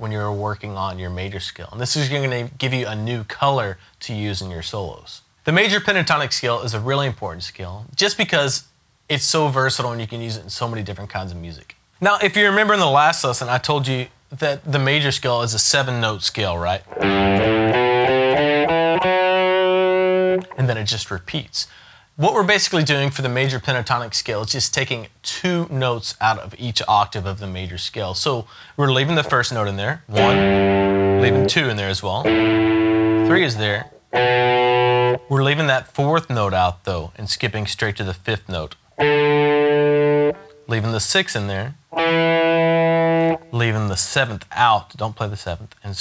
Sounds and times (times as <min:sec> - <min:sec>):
Speech: 0:00.0 - 0:16.9, 0:20.5 - 0:30.5, 0:31.2 - 0:32.3, 0:33.2 - 0:33.9, 0:35.3 - 0:38.8, 0:40.7 - 0:41.8, 0:43.5 - 0:46.0
Electric guitar: 0:16.9 - 0:20.6, 0:30.1 - 0:35.3, 0:39.0 - 0:40.7, 0:41.9 - 0:43.6
Strum: 0:16.9 - 0:20.6, 0:30.2 - 0:35.3, 0:39.0 - 0:40.6, 0:42.0 - 0:43.5.